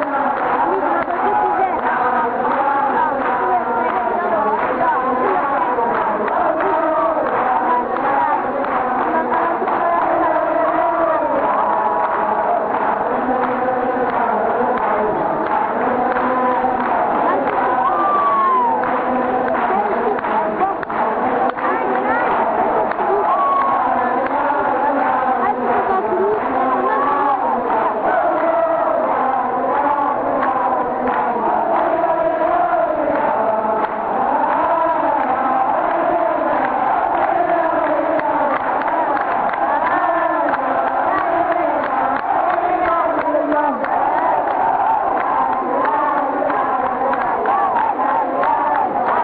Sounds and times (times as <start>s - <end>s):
Inside, large room or hall: 0.0s - 49.2s.